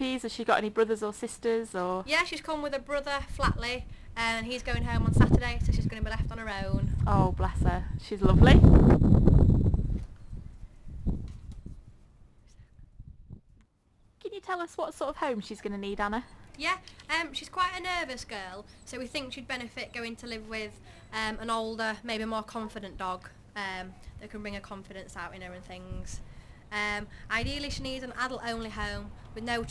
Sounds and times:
Speech: 0.0 - 8.6, 14.2 - 29.7.

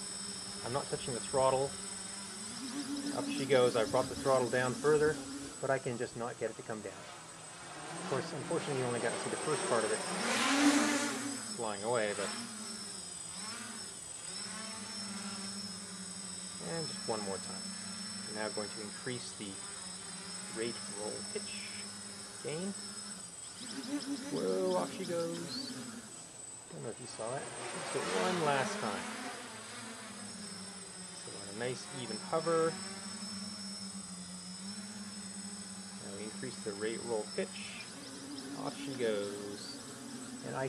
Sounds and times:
Fly, housefly: 0.0 - 40.6
Mosquito: 0.0 - 40.6.

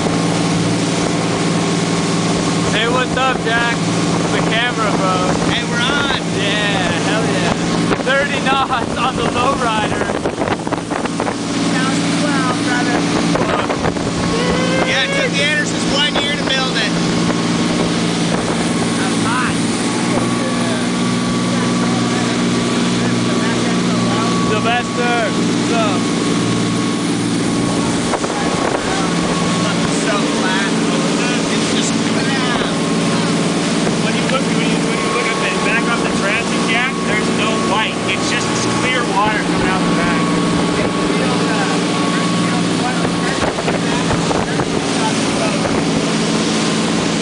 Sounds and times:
Sailboat, sailing ship: 0.0 - 47.2
Speech: 2.7 - 10.1, 18.9 - 26.1, 27.9 - 33.3, 34.0 - 45.8.

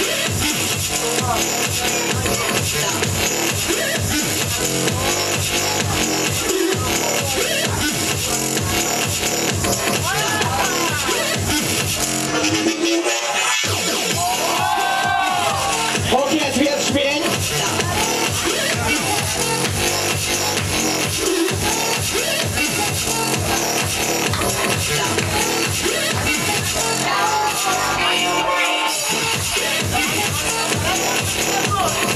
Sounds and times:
Music: 0.0 - 32.1
Speech: 0.8 - 3.2, 3.8 - 11.4, 16.1 - 19.4, 26.4 - 32.1.

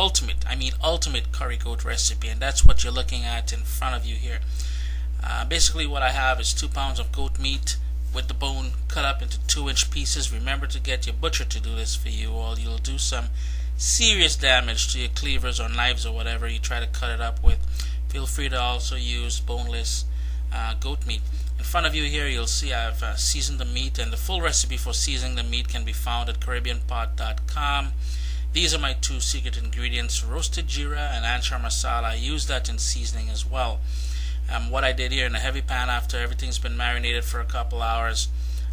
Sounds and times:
Speech: 0.0 - 4.5, 5.2 - 33.8, 34.5 - 38.3.

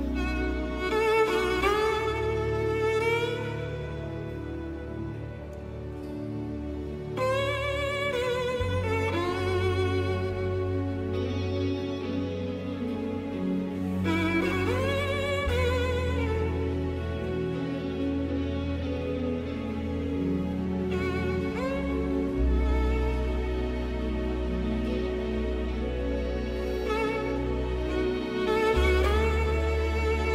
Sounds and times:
Music: 0.0 - 30.3.

